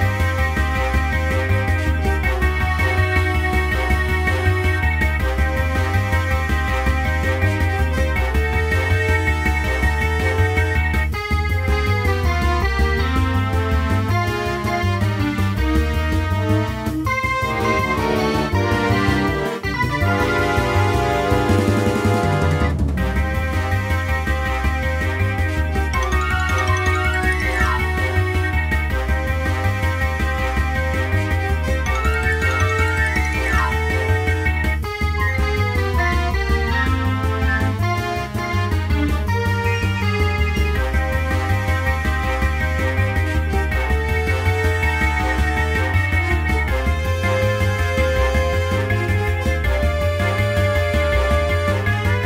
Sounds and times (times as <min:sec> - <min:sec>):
Background music: 0:00.0 - 0:52.2.